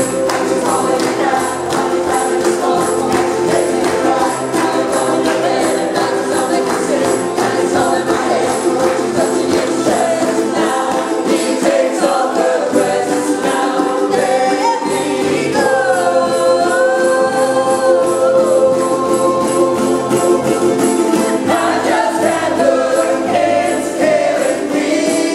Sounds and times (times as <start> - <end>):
Gospel music: 0.0 - 25.3
Singing: 0.0 - 25.3
Ukulele: 0.0 - 25.3.